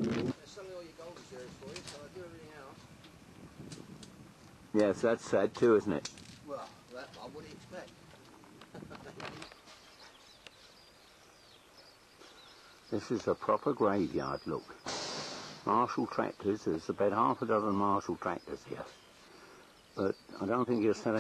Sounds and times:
Speech: 0.1 - 2.8, 4.8 - 7.9, 12.9 - 14.8, 15.7 - 19.0, 20.0 - 21.2.

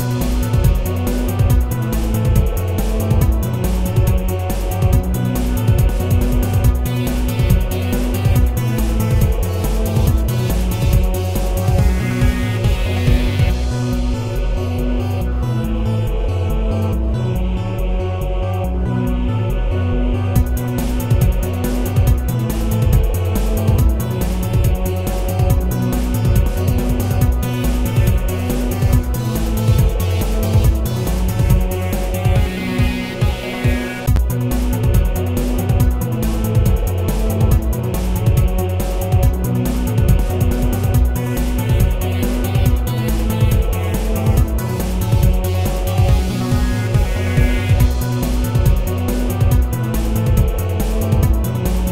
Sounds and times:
Soundtrack music: 0.0 - 51.9.

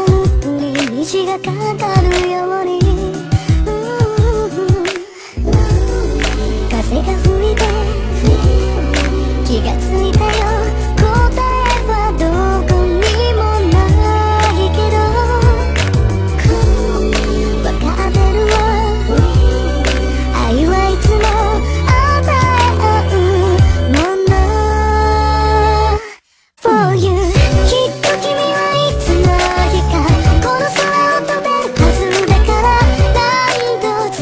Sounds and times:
Female singing: 0.0 - 15.8, 16.4 - 34.2
Music: 0.0 - 34.2.

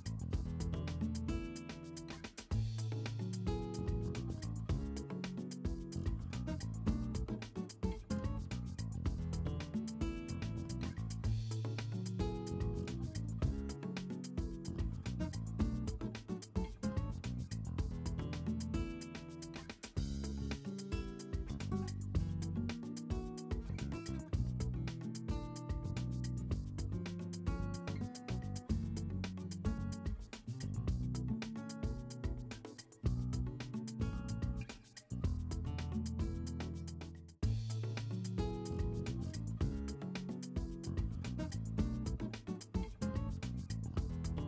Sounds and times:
Music: 0.0 - 44.4.

